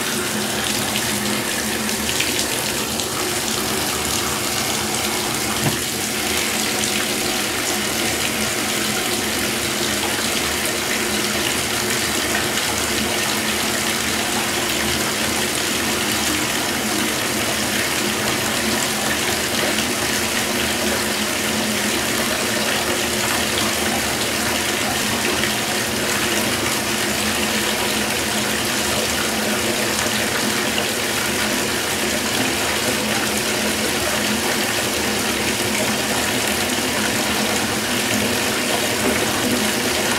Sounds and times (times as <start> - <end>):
Water: 0.0 - 40.1
Water tap, faucet: 0.0 - 40.1.